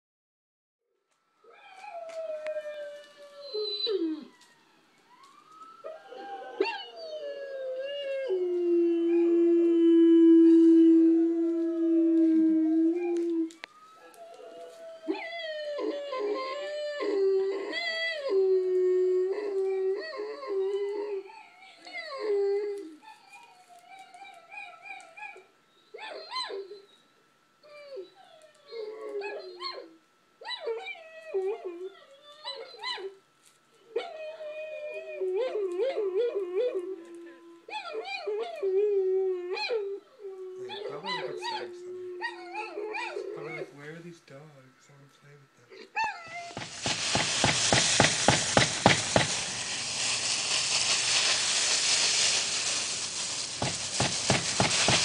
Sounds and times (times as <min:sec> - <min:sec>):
Inside, small room: 0:00.8 - 0:47.7.